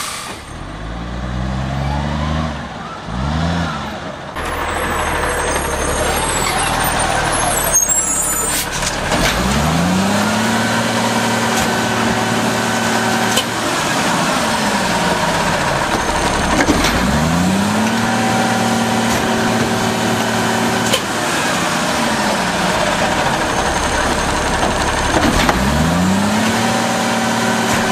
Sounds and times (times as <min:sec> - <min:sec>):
Truck: 0:00.0 - 0:27.9.